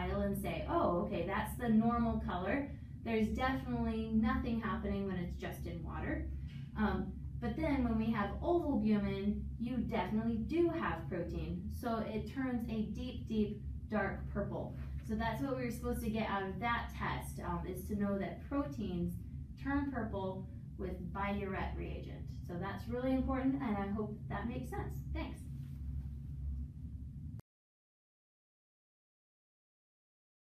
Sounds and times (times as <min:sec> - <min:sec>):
Speech: 0:00.0 - 0:25.4.